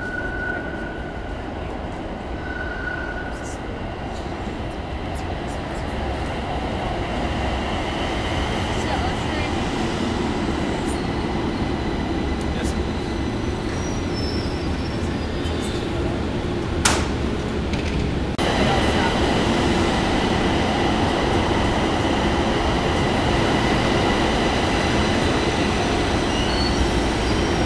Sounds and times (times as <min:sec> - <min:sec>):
Railroad car, train wagon: 0:00.0 - 0:27.6
Subway, metro, underground: 0:00.0 - 0:27.6
Train: 0:00.0 - 0:27.6
Train wheels squealing: 0:02.4 - 0:03.6, 0:12.6 - 0:15.9, 0:25.0 - 0:27.6.